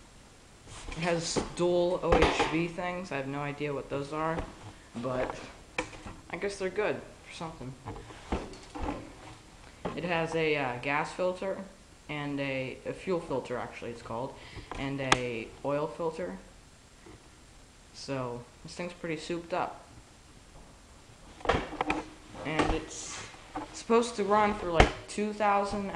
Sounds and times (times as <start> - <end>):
Speech: 1.0 - 5.6, 6.3 - 7.9, 9.9 - 16.5, 18.0 - 19.9, 22.4 - 25.9.